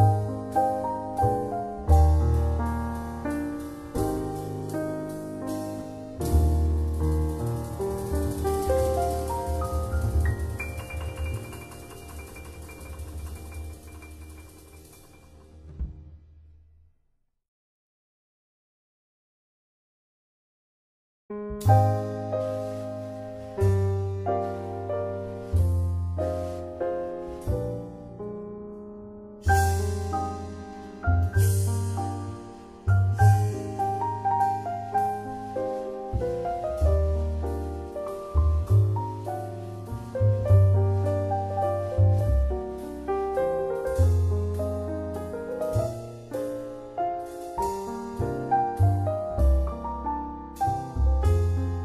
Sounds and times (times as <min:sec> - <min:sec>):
Music: 0:00.0 - 0:17.2, 0:21.3 - 0:51.8.